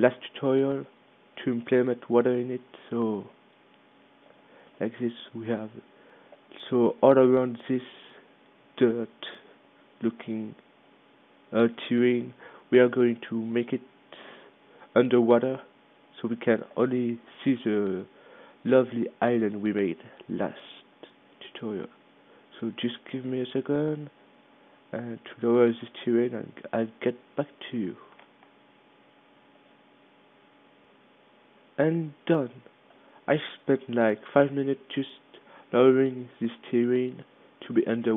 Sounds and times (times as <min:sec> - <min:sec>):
Speech: 0:00.0 - 0:03.4, 0:04.8 - 0:05.9, 0:06.6 - 0:08.2, 0:08.8 - 0:10.6, 0:11.5 - 0:13.9, 0:15.0 - 0:24.2, 0:24.9 - 0:28.1, 0:31.8 - 0:32.7, 0:33.3 - 0:38.1.